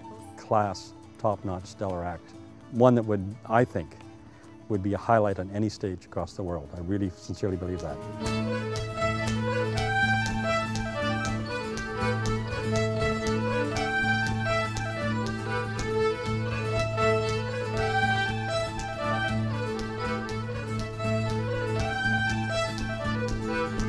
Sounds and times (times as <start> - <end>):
Music: 0.0 - 23.8
Speech: 0.4 - 4.0, 4.7 - 8.0.